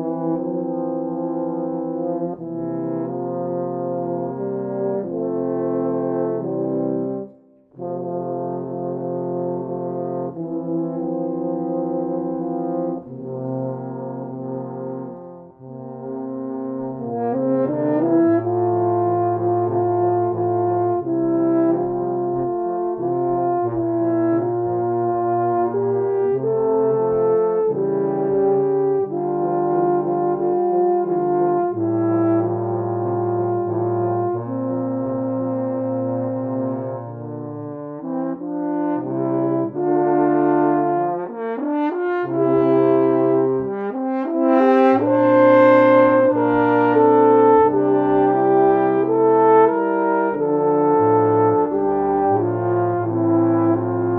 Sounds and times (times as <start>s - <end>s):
French horn: 0.0s - 54.1s.